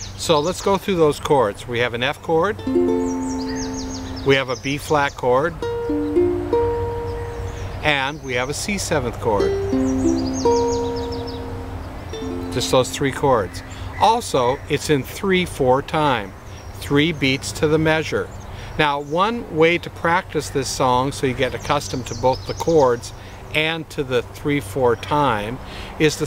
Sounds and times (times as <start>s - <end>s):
Speech: 0.2s - 2.6s, 4.2s - 5.6s, 7.8s - 9.6s, 12.6s - 26.2s
Music: 2.6s - 4.3s, 5.6s - 7.6s, 9.4s - 13.7s.